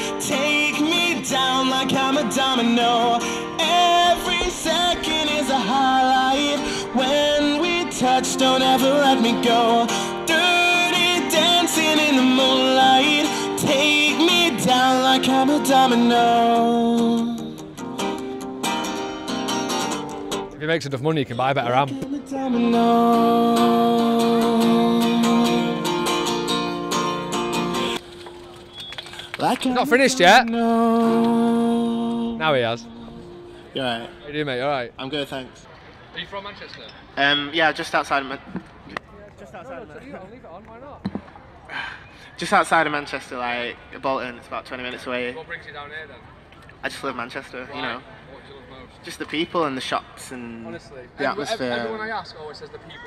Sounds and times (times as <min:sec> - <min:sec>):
Music: 0:00.0 - 0:20.6, 0:21.7 - 0:34.3.